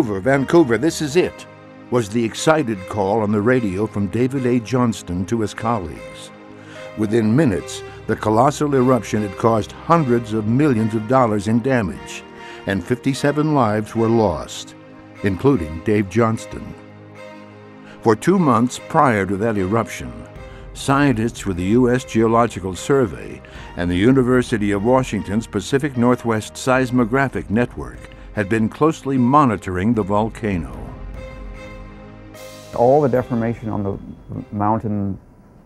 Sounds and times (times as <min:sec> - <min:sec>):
Speech: 0:00.0 - 0:06.3, 0:07.0 - 0:16.8, 0:18.0 - 0:31.0, 0:32.8 - 0:35.2
Music: 0:00.0 - 0:35.3.